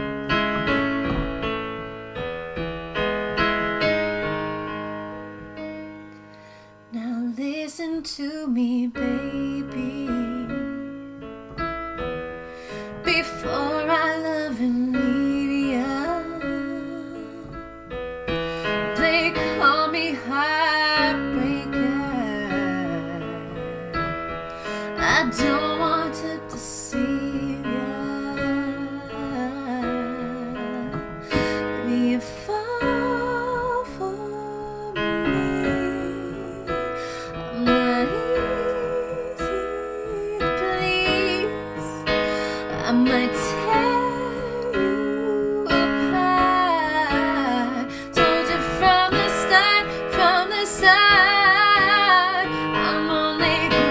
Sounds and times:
Music: 0.0 - 53.9
Female singing: 6.9 - 10.8, 13.0 - 17.6, 18.9 - 24.1, 24.9 - 42.0, 42.6 - 53.9.

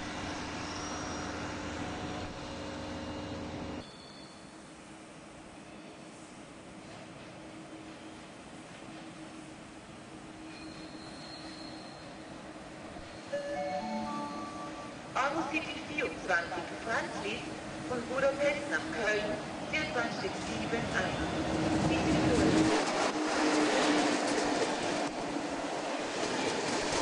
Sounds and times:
Speech: 15.2 - 21.2, 21.8 - 22.6.

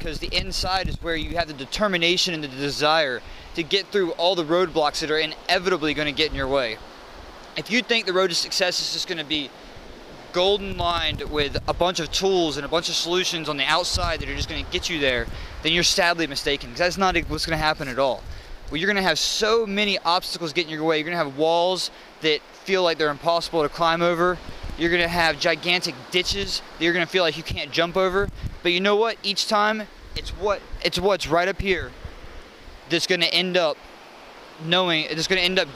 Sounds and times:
Speech: 0.0 - 6.8, 7.6 - 9.5, 10.3 - 31.9, 32.9 - 33.8, 34.6 - 35.7.

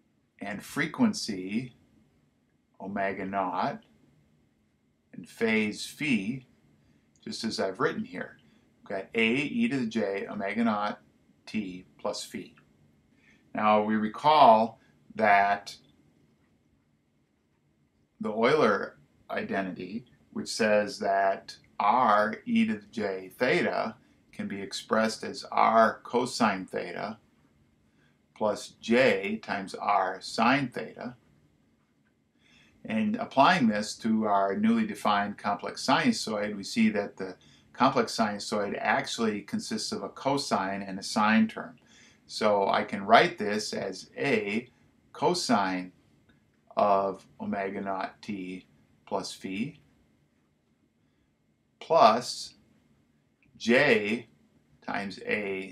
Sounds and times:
Speech: 0.4 - 1.7, 2.8 - 3.8, 5.2 - 6.4, 7.3 - 12.5, 13.6 - 15.8, 18.2 - 27.2, 28.4 - 31.2, 32.9 - 45.9, 46.7 - 49.8, 51.8 - 52.5, 53.6 - 54.3, 54.9 - 55.7.

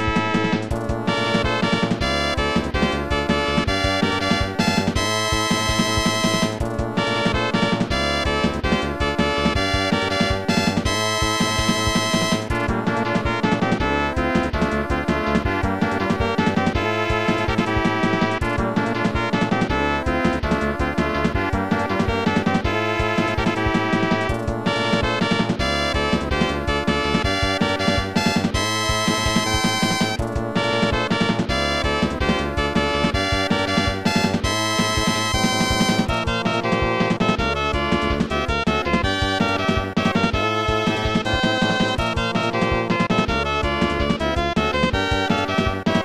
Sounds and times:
Rhythm and blues: 0.0 - 46.0.

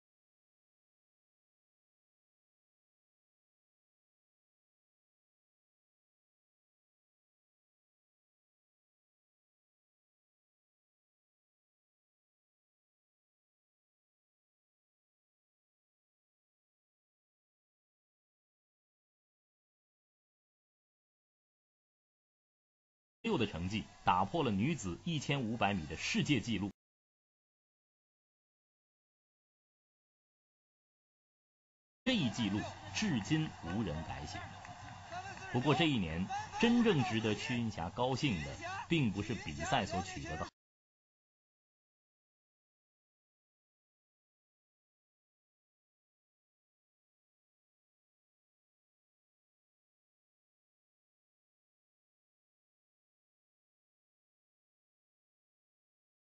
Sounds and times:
Speech: 23.3 - 26.8, 32.1 - 40.6
Run: 32.1 - 37.6.

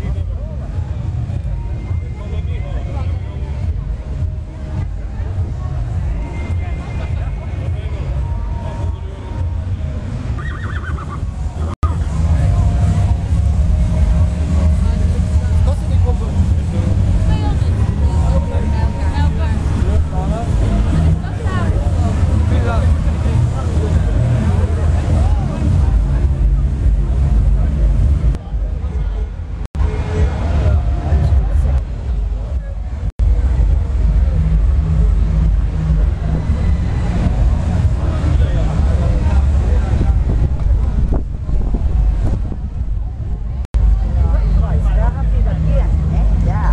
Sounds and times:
Speech: 0.0 - 10.0, 11.8 - 34.5, 36.0 - 41.1, 43.5 - 46.7
Music: 0.0 - 46.7.

